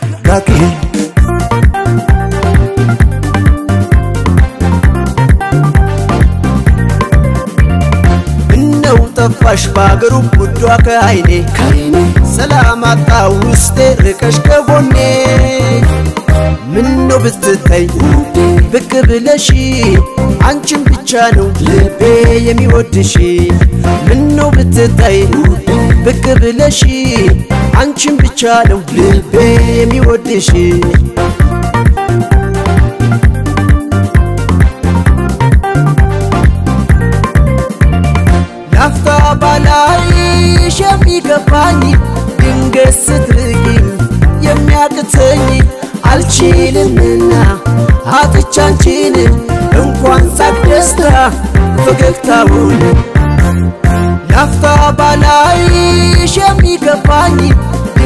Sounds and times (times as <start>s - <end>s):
Folk music: 0.0s - 12.5s, 30.6s - 41.0s, 49.4s - 56.5s
Soundtrack music: 0.0s - 58.0s.